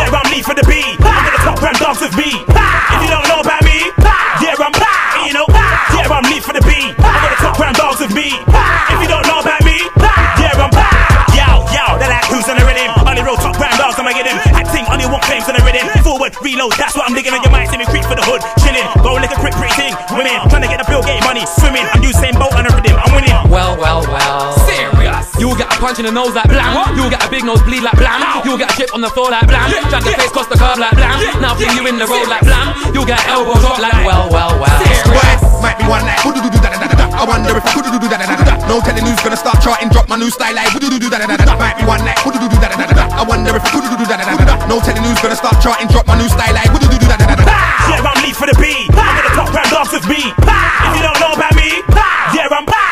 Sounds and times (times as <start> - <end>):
Music: 0.0 - 52.9.